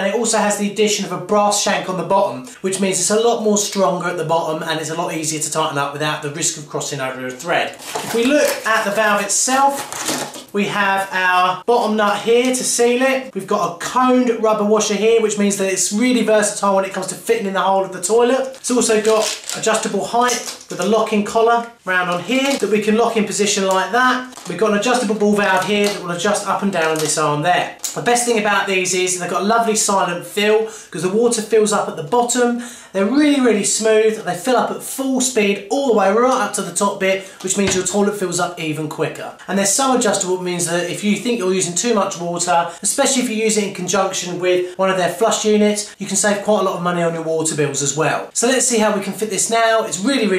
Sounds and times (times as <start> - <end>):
Speech: 0.0 - 50.3.